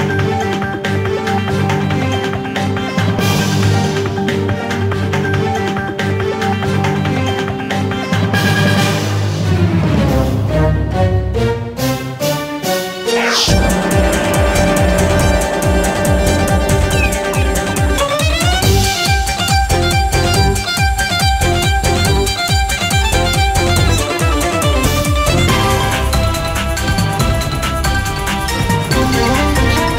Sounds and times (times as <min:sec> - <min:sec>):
Jingle (music): 0:00.0 - 0:29.9
Theme music: 0:01.2 - 0:06.8, 0:08.2 - 0:29.9.